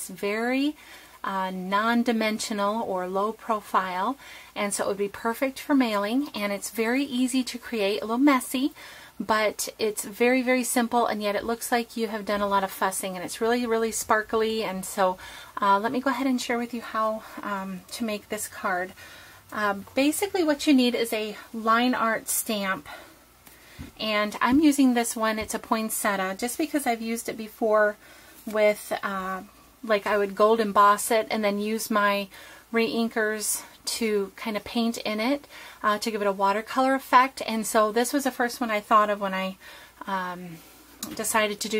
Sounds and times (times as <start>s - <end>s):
Speech: 0.0s - 18.9s, 19.5s - 23.0s, 24.0s - 41.7s.